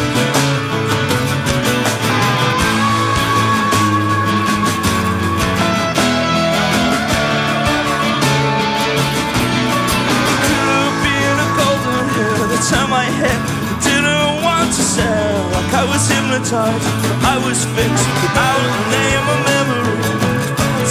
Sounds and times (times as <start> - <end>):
Music: 0.0 - 20.9.